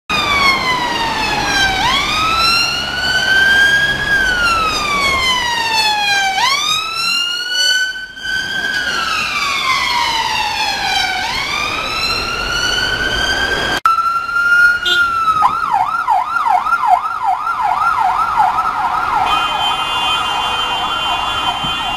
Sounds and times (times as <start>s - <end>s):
Police car (siren): 0.1s - 21.9s.